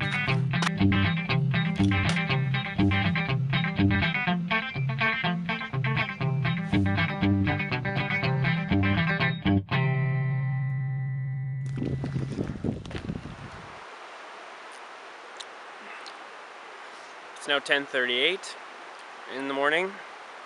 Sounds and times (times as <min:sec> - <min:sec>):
Music: 0:00.0 - 0:11.8
Speech: 0:17.4 - 0:18.6, 0:19.3 - 0:20.0.